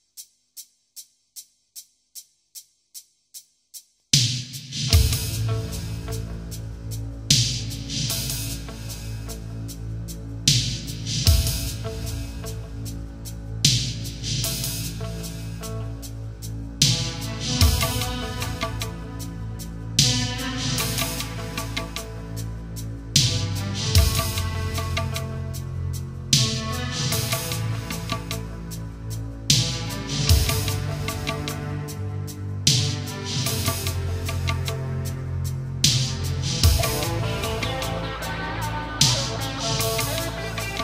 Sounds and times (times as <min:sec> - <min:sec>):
Music: 0:00.0 - 0:40.8.